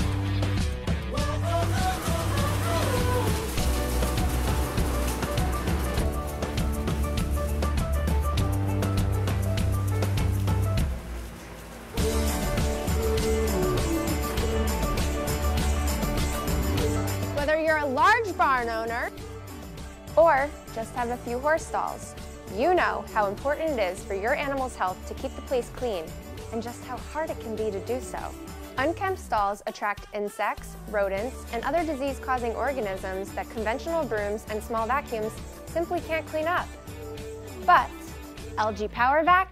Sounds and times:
Music: 0.0 - 39.5
Speech: 17.4 - 19.1, 20.2 - 36.7, 37.6 - 38.0, 38.6 - 39.5.

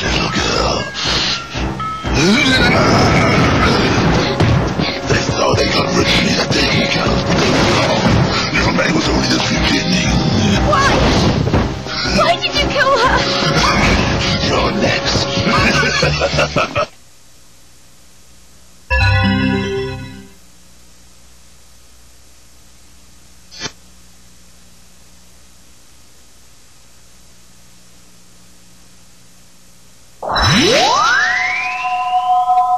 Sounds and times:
Music: 0.0 - 16.8, 18.9 - 20.4.

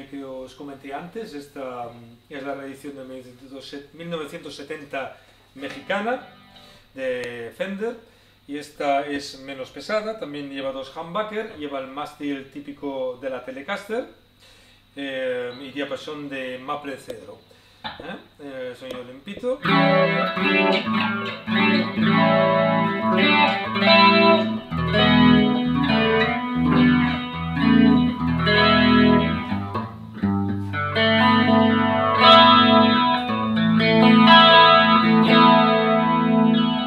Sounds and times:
Speech: 0.0 - 6.3, 7.0 - 14.2, 15.0 - 19.7
Strum: 19.6 - 36.8.

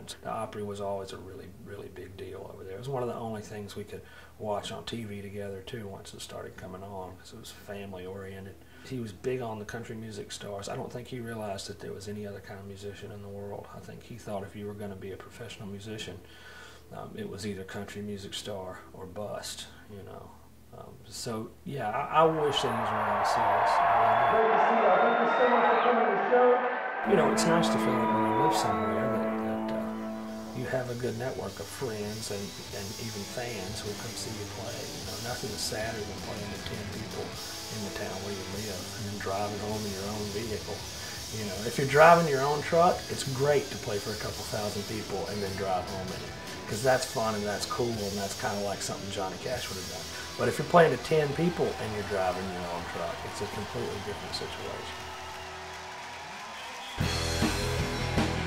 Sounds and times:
Speech: 0.0 - 16.3, 16.9 - 30.0, 30.6 - 55.0
Music: 22.4 - 58.4.

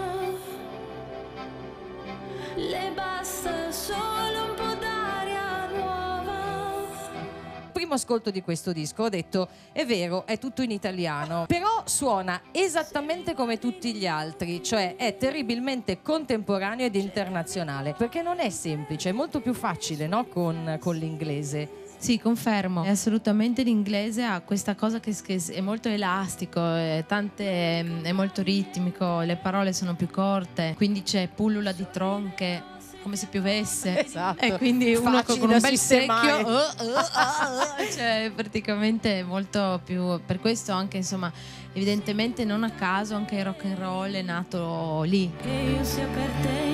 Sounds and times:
Music: 0.0 - 46.7
Speech: 7.8 - 45.4.

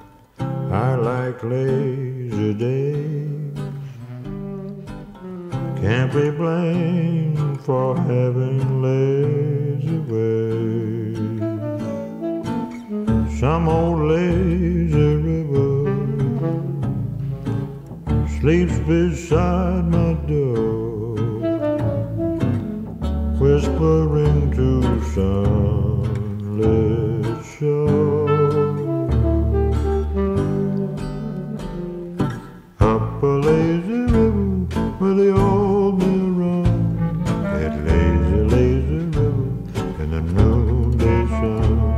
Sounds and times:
Music: 0.0 - 41.9.

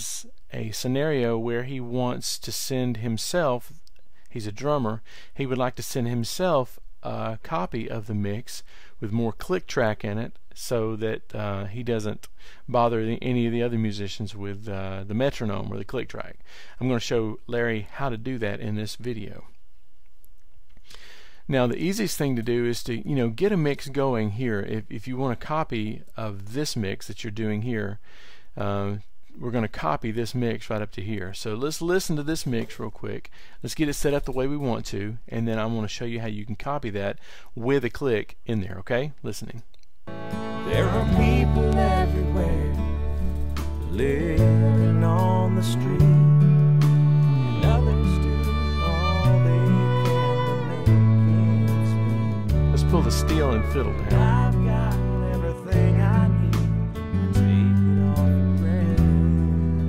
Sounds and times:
Speech: 0.0 - 19.5, 21.5 - 28.0, 28.6 - 39.7, 45.0 - 46.1, 47.6 - 48.2, 52.7 - 56.3.

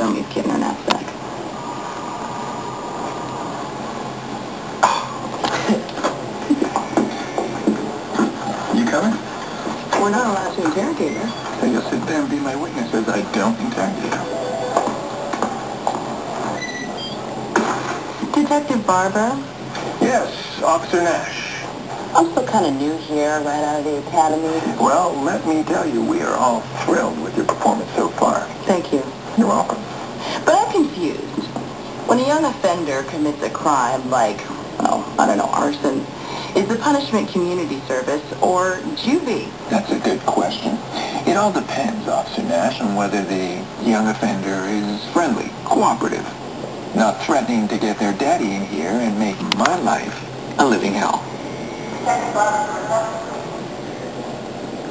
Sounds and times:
Inside, small room: 0.0 - 54.9.

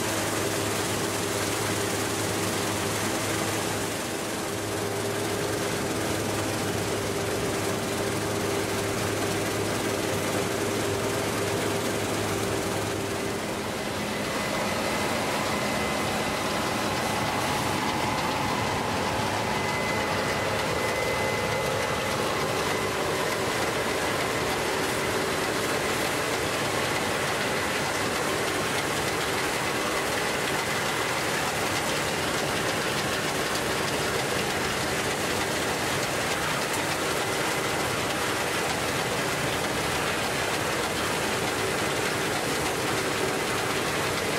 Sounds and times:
Outside, rural or natural: 0.0 - 44.3
Vehicle: 0.0 - 44.3.

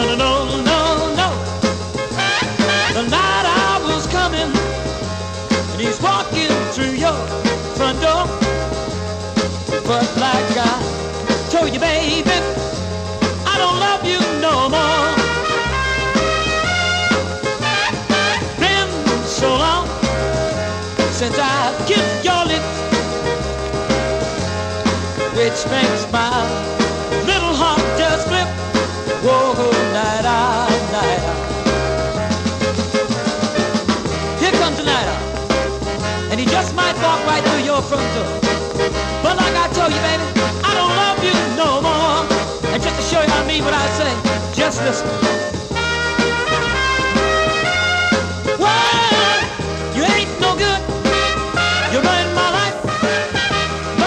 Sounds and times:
Music: 0.0 - 54.0.

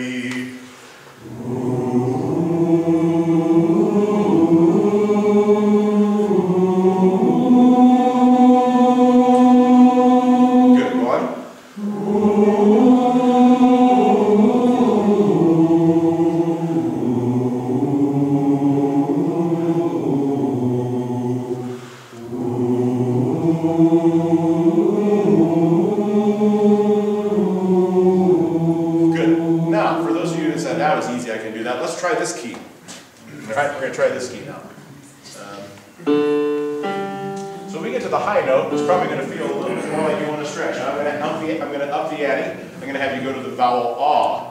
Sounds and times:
Singing: 0.0 - 31.3
Speech: 10.8 - 11.4, 29.2 - 35.8, 37.7 - 44.5.

